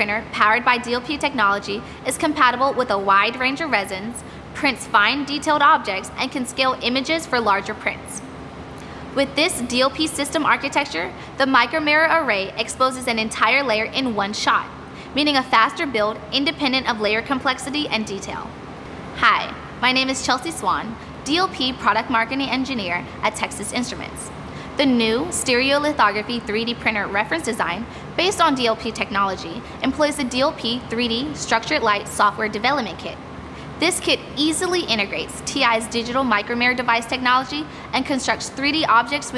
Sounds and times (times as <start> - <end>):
Speech: 0.0 - 8.2, 9.2 - 18.5, 19.2 - 33.2, 33.8 - 39.3.